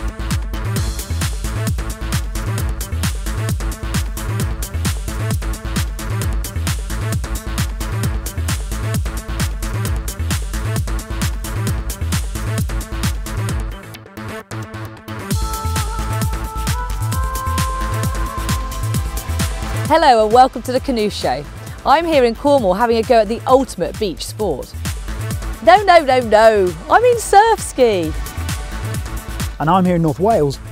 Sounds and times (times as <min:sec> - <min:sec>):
Music: 0:00.0 - 0:30.7
Speech: 0:19.9 - 0:24.7, 0:25.6 - 0:28.1, 0:29.6 - 0:30.7.